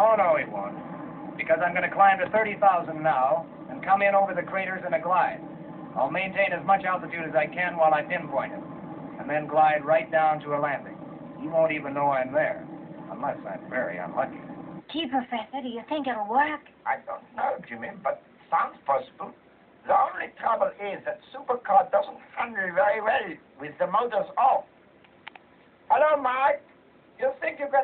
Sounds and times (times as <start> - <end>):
Television: 0.0 - 27.8
Speech: 1.4 - 5.4, 6.0 - 8.6, 9.2 - 24.7, 25.9 - 26.6, 27.2 - 27.8.